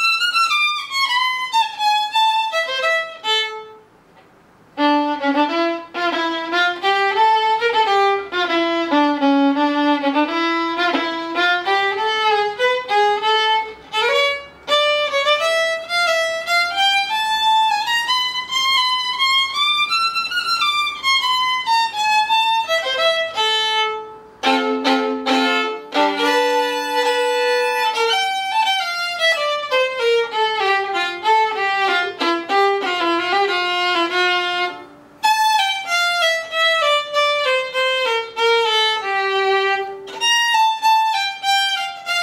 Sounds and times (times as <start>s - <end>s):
Violin, fiddle: 0.0s - 3.9s, 4.8s - 42.2s.